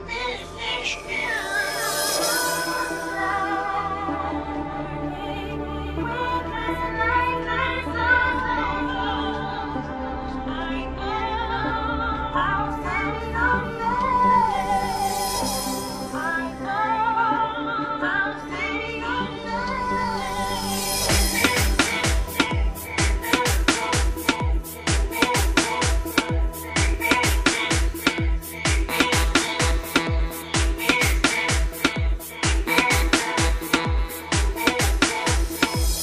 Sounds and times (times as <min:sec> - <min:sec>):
Music: 0:00.0 - 0:36.0.